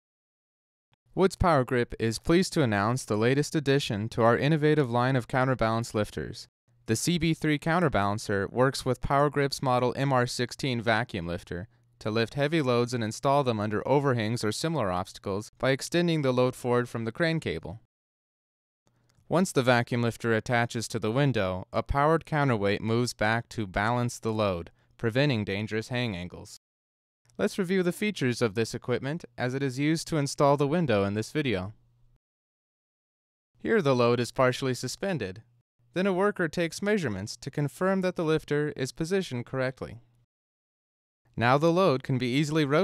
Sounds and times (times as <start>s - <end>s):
Speech: 1.2s - 17.9s, 19.3s - 26.6s, 27.4s - 31.8s, 33.6s - 40.0s, 41.4s - 42.8s.